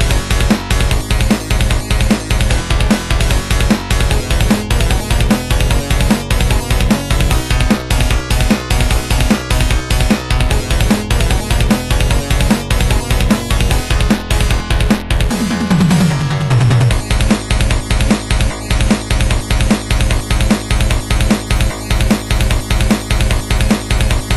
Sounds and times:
Music: 0.0s - 24.3s.

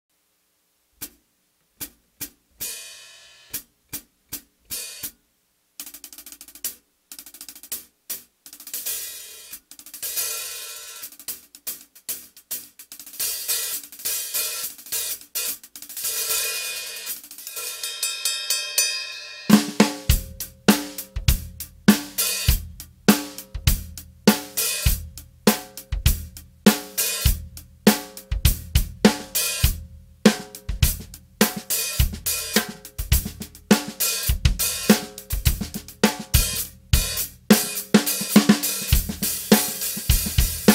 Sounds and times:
Cymbal: 2.6s - 3.7s, 8.7s - 40.7s.

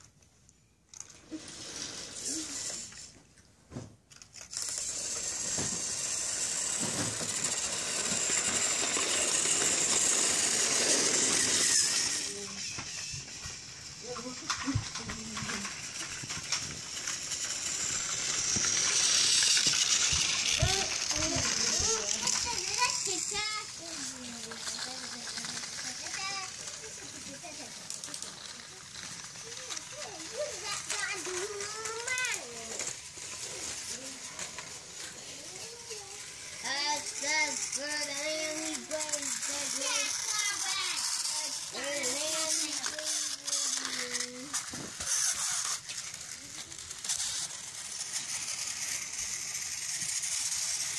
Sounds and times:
Inside, small room: 0.0s - 50.9s
Child speech, kid speaking: 10.9s - 12.8s, 14.0s - 16.0s, 20.5s - 33.0s, 33.7s - 45.6s.

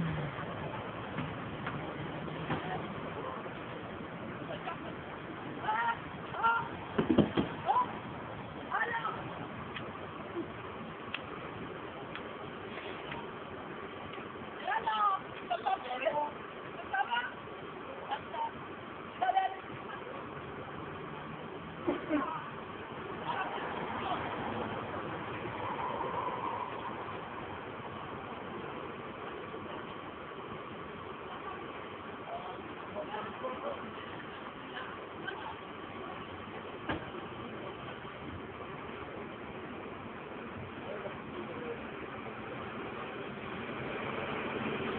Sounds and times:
Vehicle: 0.0s - 44.9s.

